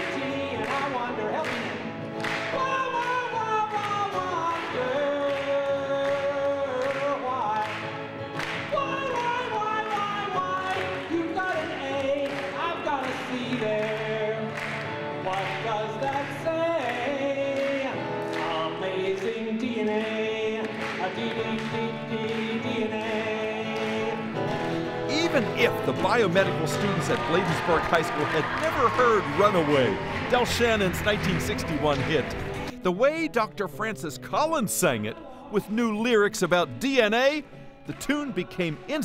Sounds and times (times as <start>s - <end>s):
Male singing: 0.0s - 1.8s, 2.5s - 7.9s, 8.6s - 14.6s, 15.2s - 24.4s, 32.9s - 39.0s
Music: 0.0s - 39.0s.